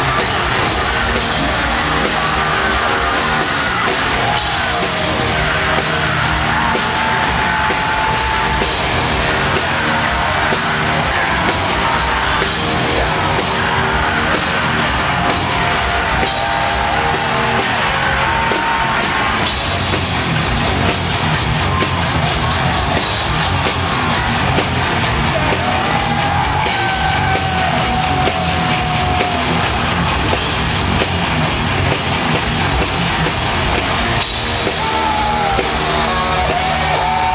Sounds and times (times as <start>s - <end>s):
Music: 0.0s - 37.3s.